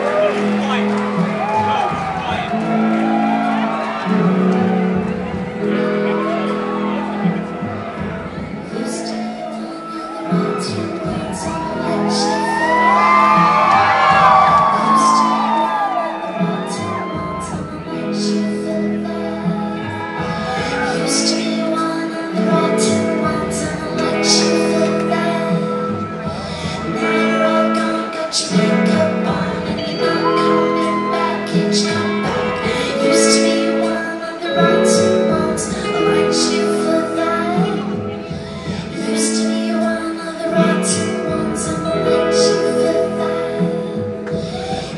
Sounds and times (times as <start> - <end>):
Inside, large room or hall: 0.0 - 44.9
Music: 0.0 - 44.9
Singing: 0.0 - 44.9.